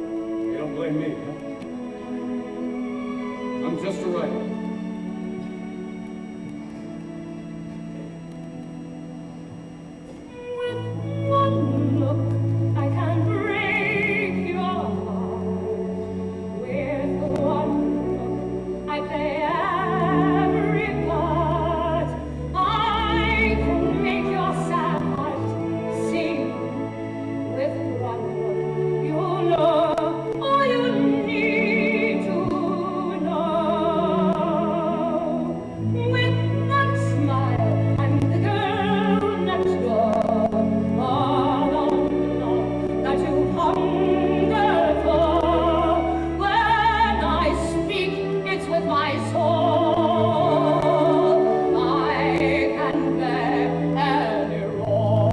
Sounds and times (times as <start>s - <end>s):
Opera: 0.0s - 55.3s.